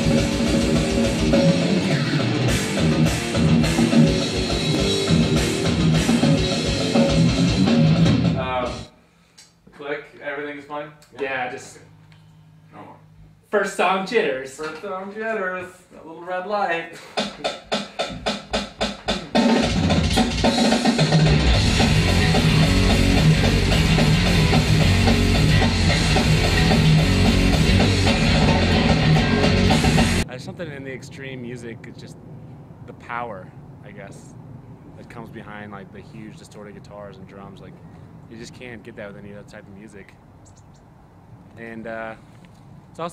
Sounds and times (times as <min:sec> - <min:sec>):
Music: 0:00.0 - 0:08.9, 0:17.2 - 0:30.2
Speech: 0:08.4 - 0:08.9, 0:09.7 - 0:11.9, 0:12.7 - 0:17.0, 0:30.2 - 0:32.2, 0:32.9 - 0:34.4, 0:35.0 - 0:40.2, 0:41.6 - 0:42.2.